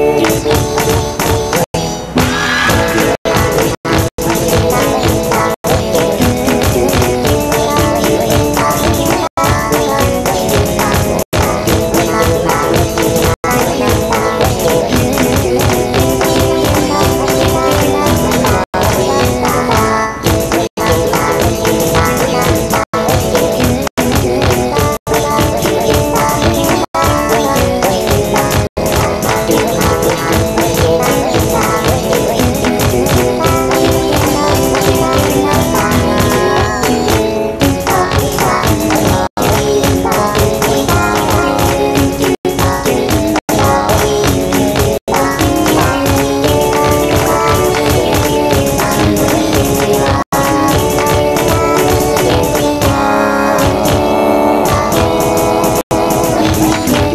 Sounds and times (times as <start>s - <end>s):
Funny music: 0.0s - 57.1s.